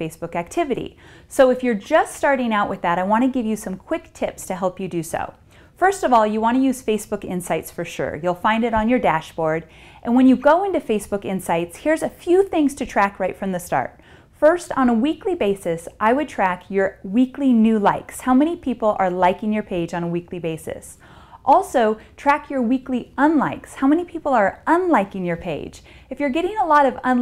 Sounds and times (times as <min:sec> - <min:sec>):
Speech: 0:00.0 - 0:27.2.